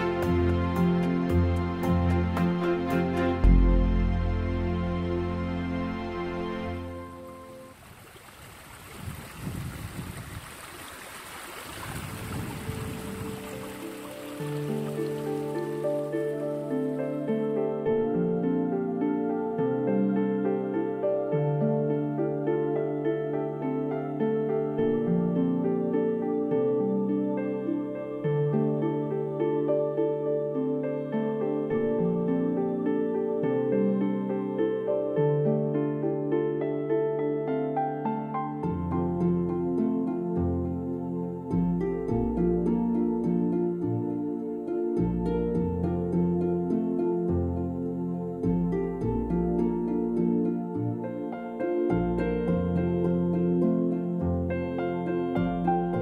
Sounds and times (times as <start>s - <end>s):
Music: 0.0s - 7.8s, 12.9s - 56.0s
Stream: 0.0s - 56.0s.